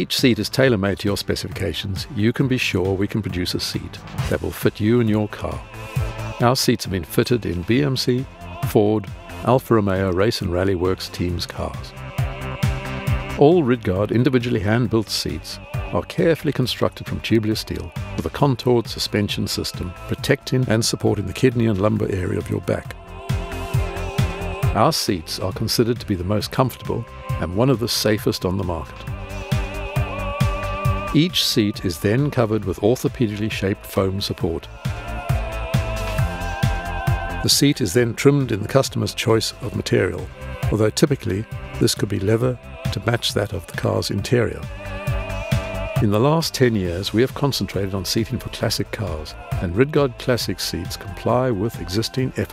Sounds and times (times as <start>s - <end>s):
Speech: 0.0s - 5.6s, 6.4s - 11.9s, 13.4s - 23.0s, 24.6s - 29.1s, 31.1s - 34.7s, 37.4s - 44.7s, 46.0s - 52.5s
Music: 0.0s - 52.5s.